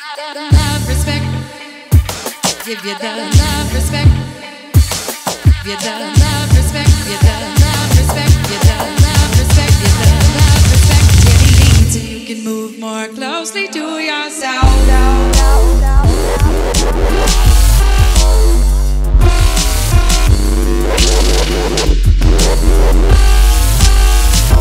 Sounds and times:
Singing: 0:00.0 - 0:16.8
Dubstep: 0:04.8 - 0:12.1, 0:14.6 - 0:24.6.

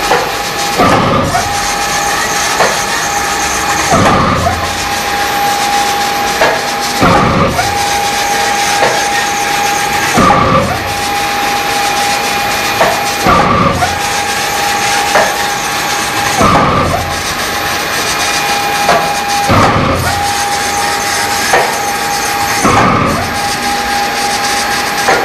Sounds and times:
Printer: 0:00.0 - 0:25.2.

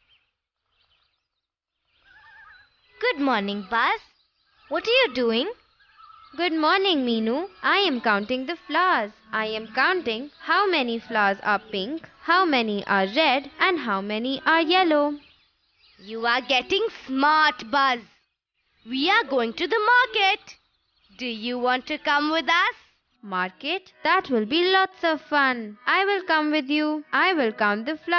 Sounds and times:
Music: 0:02.7 - 0:05.6, 0:06.2 - 0:15.4, 0:16.0 - 0:18.0, 0:18.9 - 0:28.1
Speech: 0:03.0 - 0:04.0, 0:04.7 - 0:05.6, 0:06.4 - 0:15.2, 0:16.0 - 0:18.1, 0:18.9 - 0:20.6, 0:21.2 - 0:28.1.

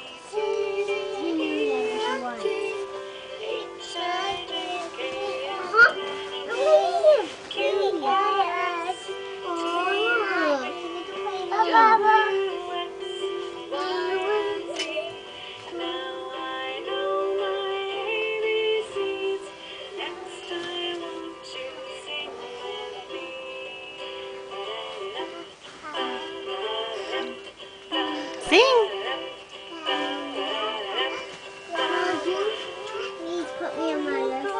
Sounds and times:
Music for children: 0:00.0 - 0:34.5
Synthetic singing: 0:00.3 - 0:23.3, 0:28.5 - 0:34.5.

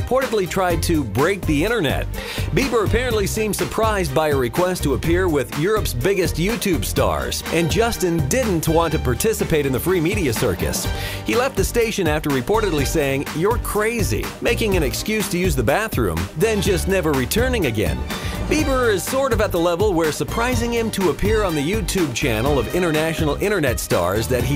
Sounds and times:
Music: 0:00.0 - 0:24.5
Speech: 0:00.0 - 0:24.5.

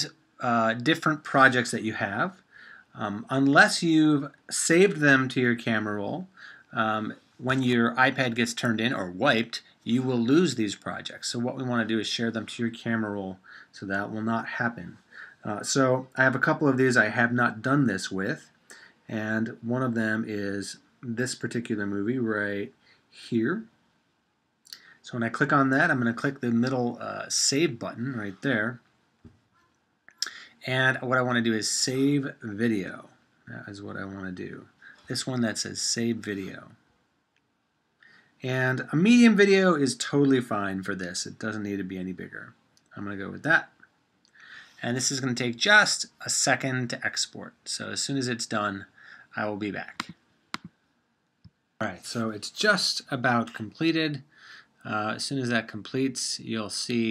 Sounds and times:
Speech: 0:00.0 - 0:18.5, 0:19.1 - 0:23.7, 0:24.7 - 0:28.8, 0:30.2 - 0:36.8, 0:38.4 - 0:43.8, 0:44.7 - 0:50.2, 0:51.8 - 0:57.1.

